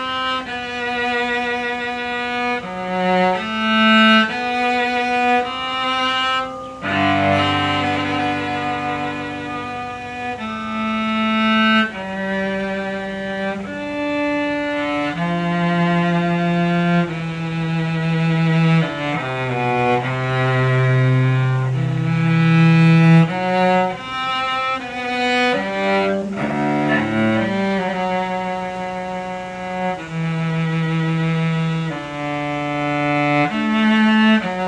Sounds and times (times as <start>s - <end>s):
Cello: 0.0s - 34.6s.